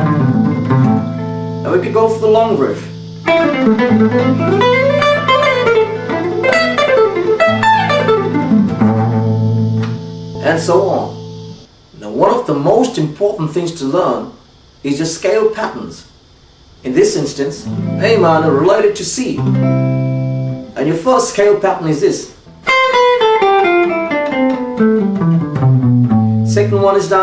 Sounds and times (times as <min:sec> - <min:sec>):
Guitar: 0:00.0 - 0:11.7, 0:17.1 - 0:27.2
Inside, small room: 0:00.0 - 0:27.2
Speech: 0:01.6 - 0:03.0, 0:10.4 - 0:11.2, 0:12.0 - 0:16.1, 0:16.8 - 0:19.4, 0:20.8 - 0:22.4, 0:26.5 - 0:27.2.